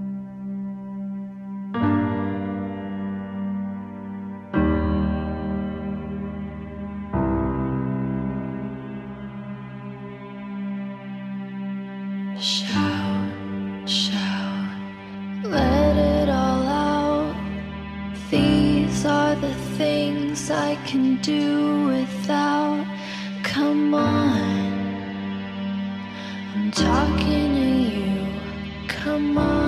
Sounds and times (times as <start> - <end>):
Music: 0.0 - 29.6.